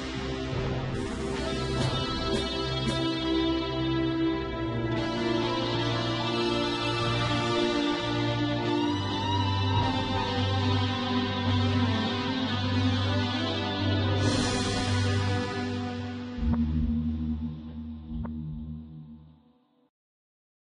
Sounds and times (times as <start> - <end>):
Music: 0.0 - 19.9.